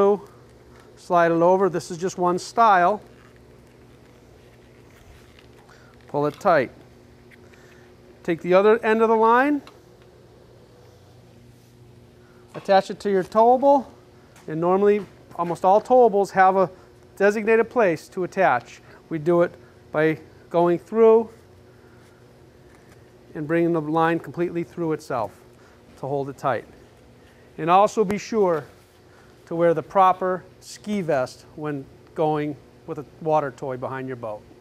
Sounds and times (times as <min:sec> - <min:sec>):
Speech: 0:00.0 - 0:00.3, 0:01.0 - 0:03.1, 0:06.1 - 0:06.8, 0:08.2 - 0:09.7, 0:12.6 - 0:21.4, 0:23.4 - 0:25.4, 0:26.0 - 0:26.7, 0:27.6 - 0:28.8, 0:29.5 - 0:34.5.